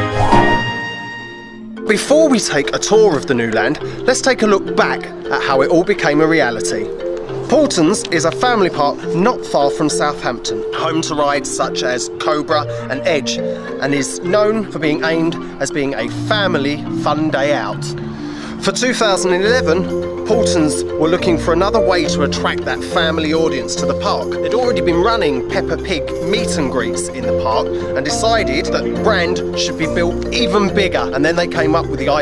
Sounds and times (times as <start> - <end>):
Music: 0.0 - 32.2
Speech: 1.9 - 6.9, 7.5 - 32.2.